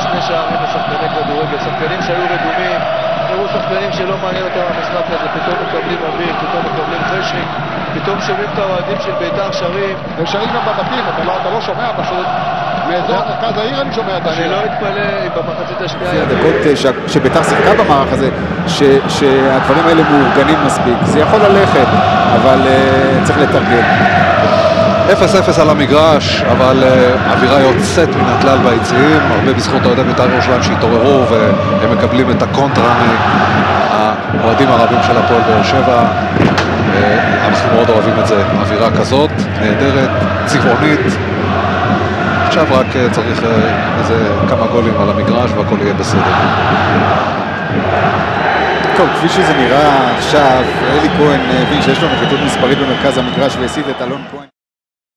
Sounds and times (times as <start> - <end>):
Speech: 0.0 - 23.9, 25.1 - 33.2, 33.9 - 36.1, 36.9 - 41.2, 42.5 - 46.4, 49.0 - 54.5
Music: 0.0 - 54.5.